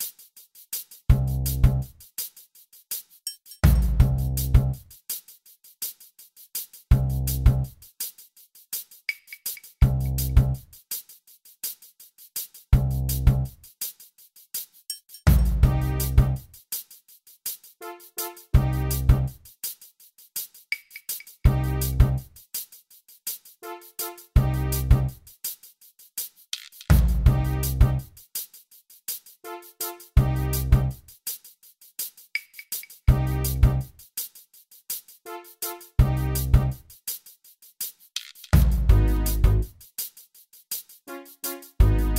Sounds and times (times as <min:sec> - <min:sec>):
Music: 0:00.0 - 0:42.1.